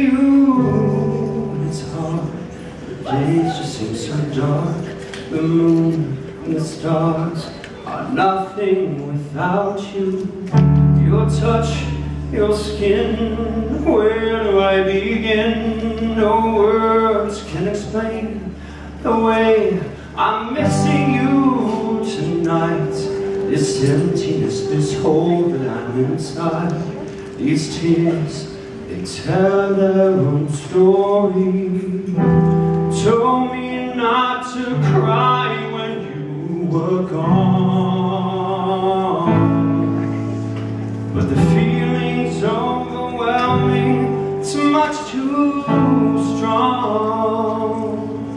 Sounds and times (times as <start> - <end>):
Male singing: 0.0 - 40.1, 41.2 - 48.3
Music: 0.0 - 48.3.